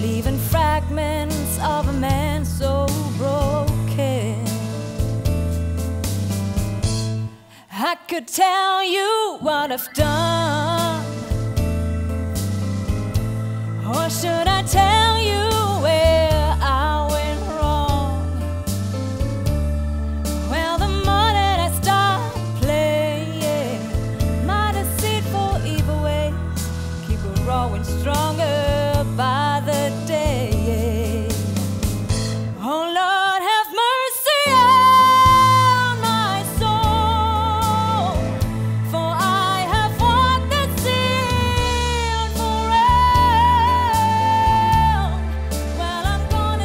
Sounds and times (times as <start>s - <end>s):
Music: 0.0s - 46.6s.